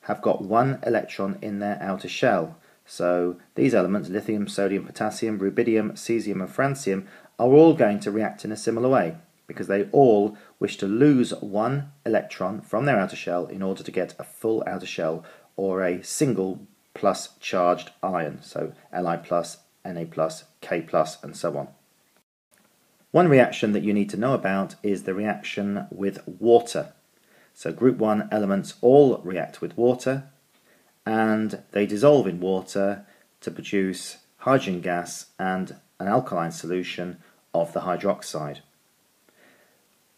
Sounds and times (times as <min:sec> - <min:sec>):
Speech: 0:00.0 - 0:21.8, 0:23.1 - 0:27.0, 0:27.6 - 0:30.4, 0:31.0 - 0:38.7.